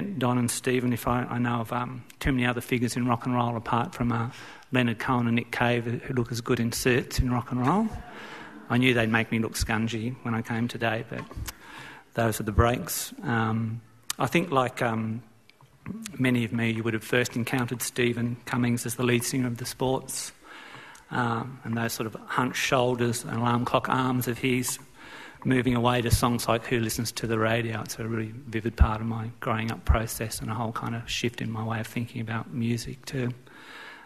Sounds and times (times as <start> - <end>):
Speech: 0.0 - 8.1, 8.7 - 11.4, 12.1 - 20.4, 21.1 - 33.4.